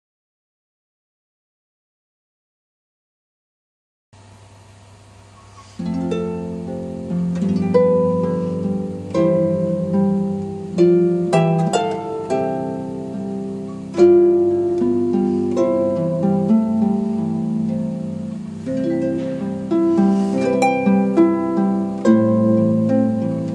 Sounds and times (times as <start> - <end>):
Harp: 5.5 - 23.5.